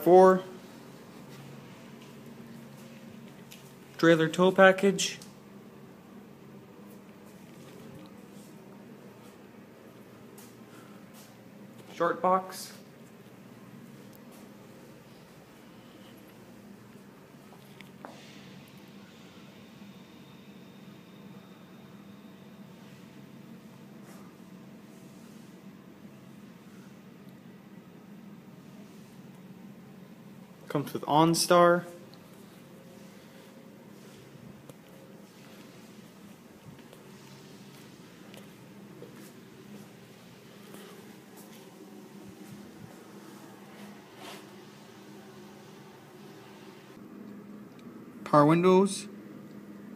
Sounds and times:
Speech: 0.0s - 0.6s, 4.0s - 5.4s, 11.9s - 12.9s, 30.7s - 32.0s, 48.2s - 49.2s.

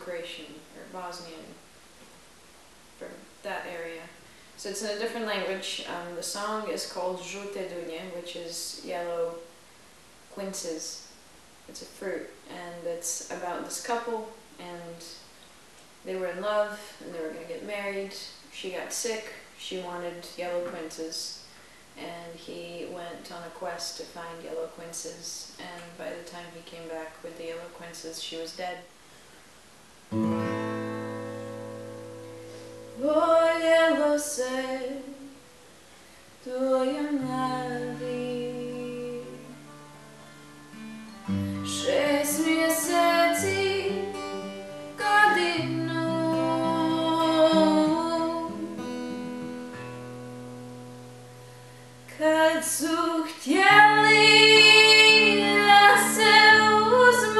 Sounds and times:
Music: 30.1s - 33.0s, 37.2s - 52.2s, 53.6s - 57.3s.

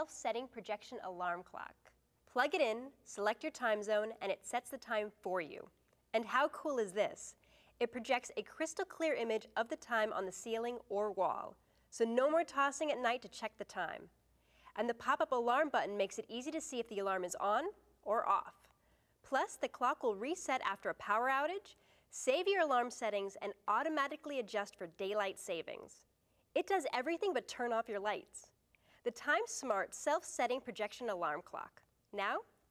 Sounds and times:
Speech: 0.0s - 14.1s, 14.8s - 18.7s, 19.3s - 26.0s, 26.6s - 28.5s, 29.1s - 32.5s.

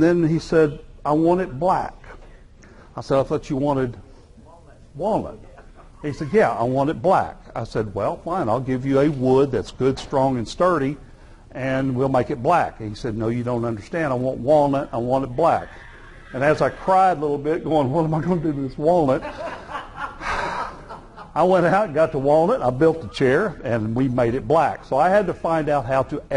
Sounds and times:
Speech: 0.0s - 2.0s, 3.0s - 11.0s, 11.6s - 15.7s, 16.4s - 19.2s, 21.4s - 26.3s.

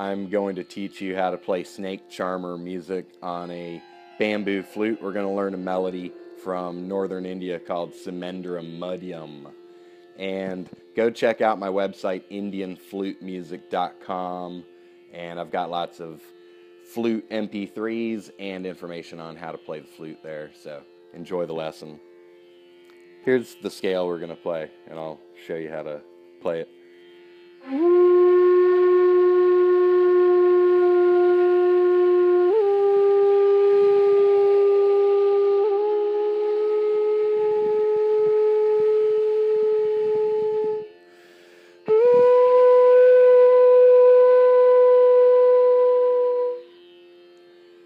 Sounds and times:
Flute: 0.0s - 10.8s, 27.6s - 41.1s, 41.8s - 47.0s.

